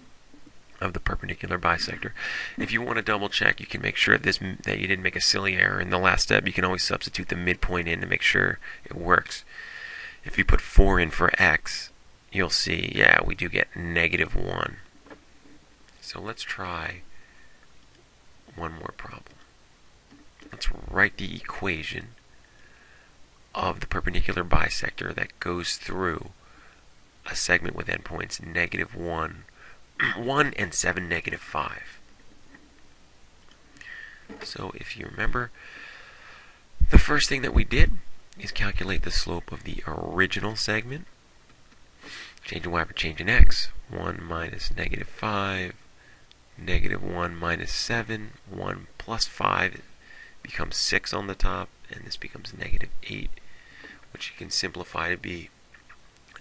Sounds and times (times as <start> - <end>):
Speech: 0.8 - 9.5, 10.2 - 14.9, 16.0 - 17.1, 18.5 - 19.4, 20.5 - 22.2, 23.5 - 26.4, 27.2 - 32.0, 34.4 - 35.6, 36.8 - 41.1, 42.4 - 45.8, 46.6 - 49.9, 50.5 - 53.4, 54.1 - 55.5.